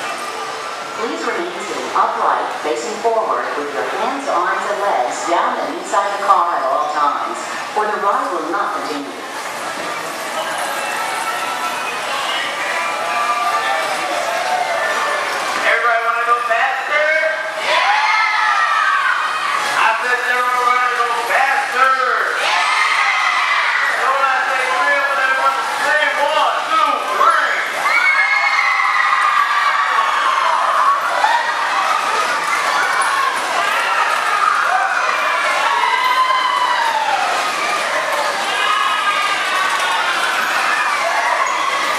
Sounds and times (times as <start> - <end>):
Speech: 1.0 - 9.3, 19.8 - 22.5, 23.9 - 27.8.